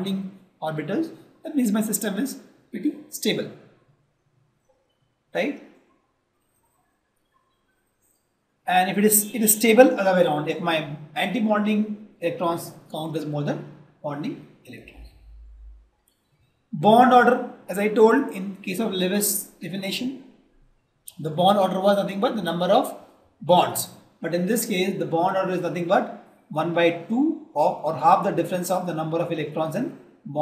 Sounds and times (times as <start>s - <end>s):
Speech: 0.0s - 3.5s, 5.4s - 5.6s, 8.7s - 15.1s, 16.8s - 20.2s, 21.1s - 30.4s.